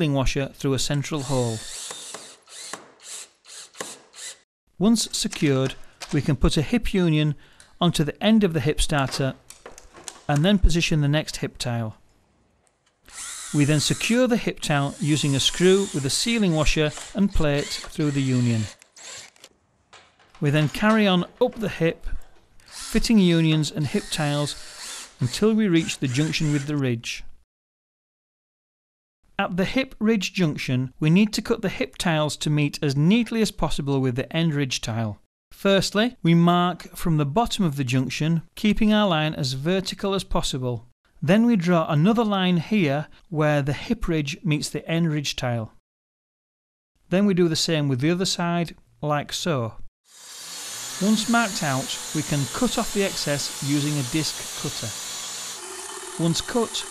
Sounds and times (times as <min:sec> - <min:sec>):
Speech: 0:00.0 - 0:01.6, 0:04.8 - 0:09.4, 0:10.3 - 0:12.0, 0:13.6 - 0:18.8, 0:20.4 - 0:22.2, 0:22.9 - 0:24.6, 0:25.2 - 0:27.3, 0:29.4 - 0:45.8, 0:47.1 - 0:49.8, 0:51.0 - 0:55.0, 0:56.2 - 0:56.9.